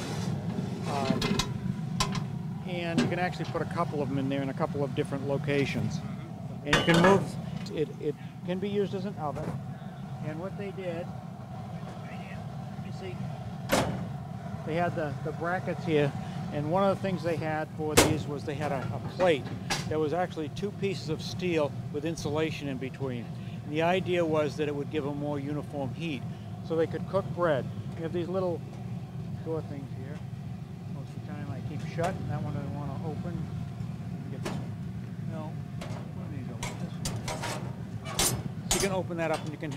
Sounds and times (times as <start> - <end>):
Speech: 0.9 - 1.4, 2.6 - 9.6, 10.2 - 11.1, 11.8 - 13.2, 14.7 - 28.6, 29.4 - 30.2, 30.9 - 33.5, 34.3 - 34.6, 35.3 - 37.0, 38.7 - 39.7.